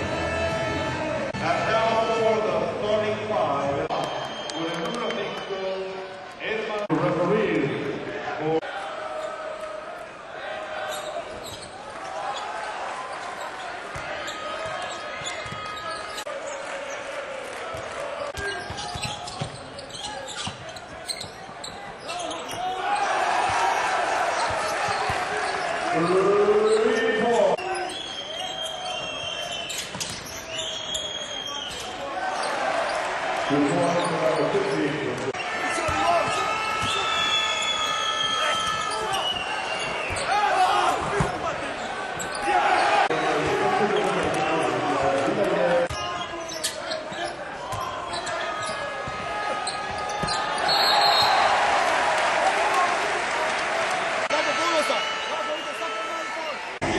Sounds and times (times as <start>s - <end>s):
Speech: 1.4s - 8.7s, 33.5s - 36.4s, 43.1s - 48.8s.